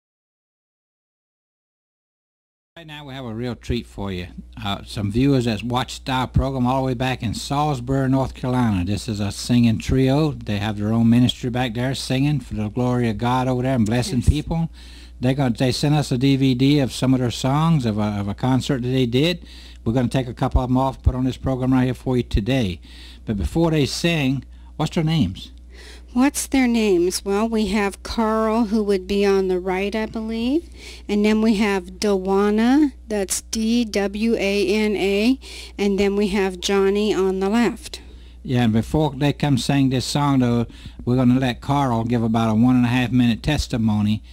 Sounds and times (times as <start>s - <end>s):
Speech: 2.8s - 25.6s, 26.2s - 44.2s.